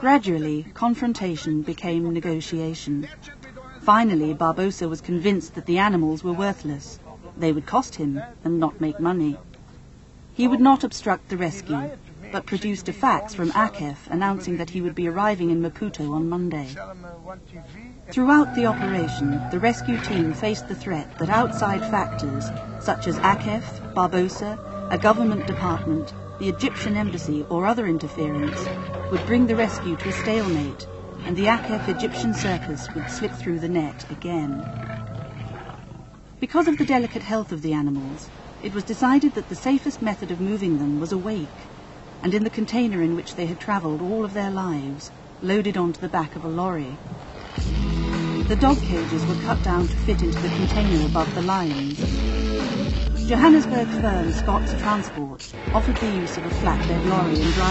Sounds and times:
Speech: 0.0 - 9.5, 10.4 - 34.6, 36.4 - 41.6, 42.2 - 47.0, 48.5 - 52.1, 53.2 - 57.7
Music: 18.2 - 34.7, 47.6 - 57.7
Roaring cats (lions, tigers): 18.4 - 33.4, 34.0 - 37.4.

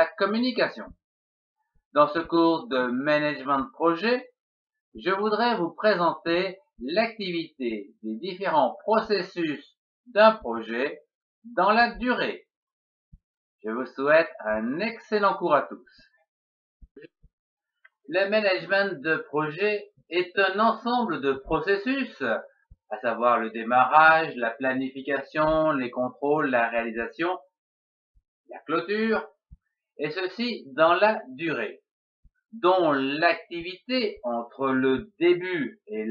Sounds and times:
Speech: 0.0 - 1.0, 2.0 - 4.4, 5.0 - 12.4, 13.6 - 15.9, 18.1 - 27.5, 28.5 - 29.4, 30.0 - 31.8, 32.6 - 36.1.

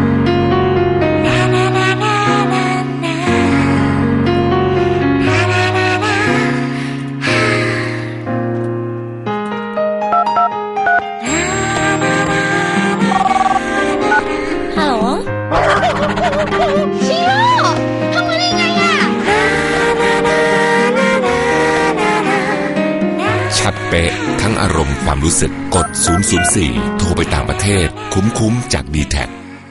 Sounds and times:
Music: 0.0 - 29.7
Speech: 23.6 - 29.4.

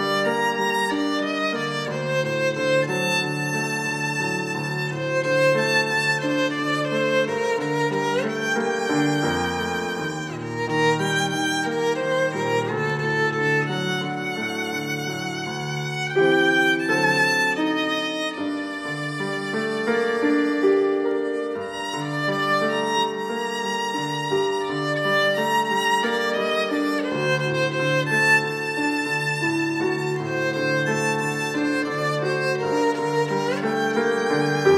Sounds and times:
Violin, fiddle: 0.0 - 34.7.

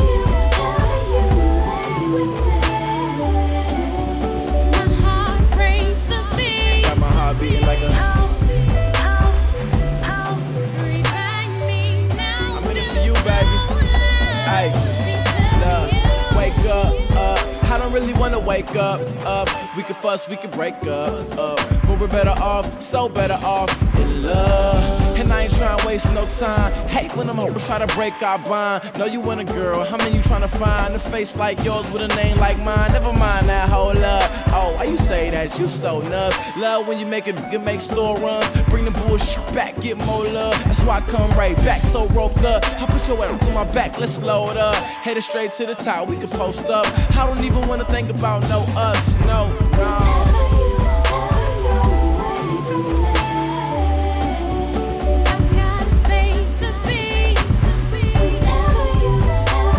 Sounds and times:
Rapping: 0.0 - 3.7, 4.5 - 54.0
Music: 0.0 - 59.7.

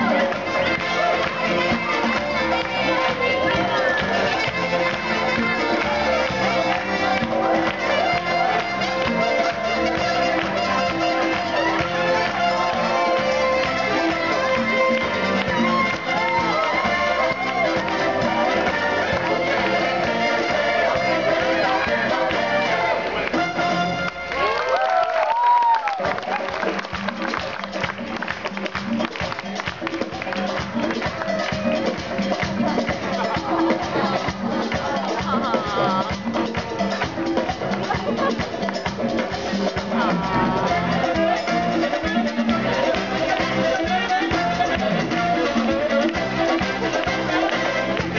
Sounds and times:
Music: 0.0 - 48.1.

